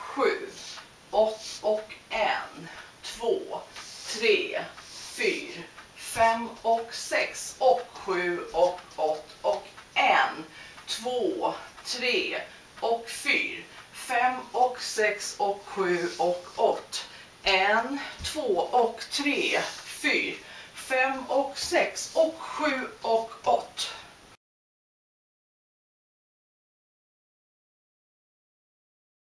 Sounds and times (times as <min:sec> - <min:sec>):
Speech: 0:00.0 - 0:24.1.